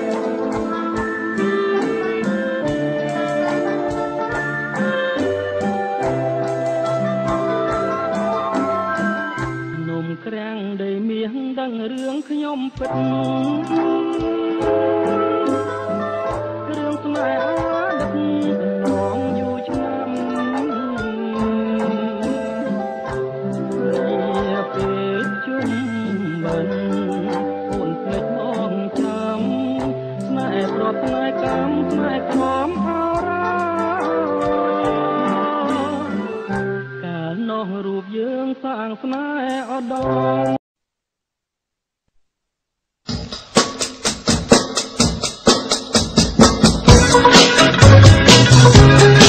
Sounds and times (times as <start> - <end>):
Traditional music: 0.0 - 10.3, 12.8 - 37.2, 43.2 - 49.2.